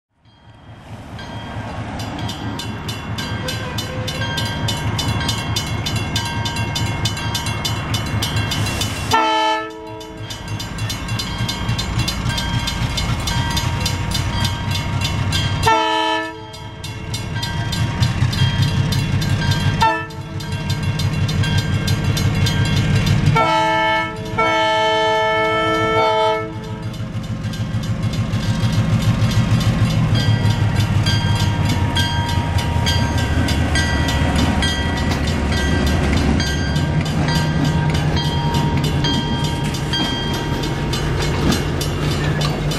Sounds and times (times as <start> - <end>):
Outside, urban or manmade: 0.0 - 42.7
Railroad car, train wagon: 0.1 - 42.7
Train horn: 3.4 - 4.3, 9.1 - 10.2, 15.6 - 16.6, 19.8 - 20.4, 23.4 - 26.9
Vehicle horn, car horn, honking: 9.1 - 10.0, 15.6 - 16.5, 19.8 - 20.2, 23.4 - 26.6
Train whistle: 9.1 - 10.2, 15.6 - 16.6, 19.8 - 20.2, 23.4 - 26.8.